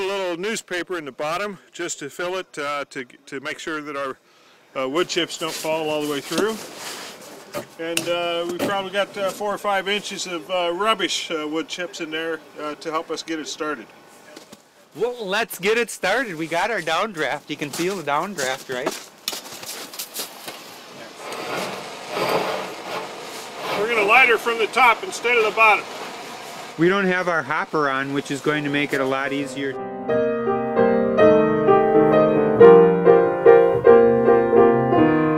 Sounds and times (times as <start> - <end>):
Speech: 0.0 - 4.2, 4.8 - 6.6, 7.8 - 19.0, 23.7 - 25.8, 26.8 - 29.8.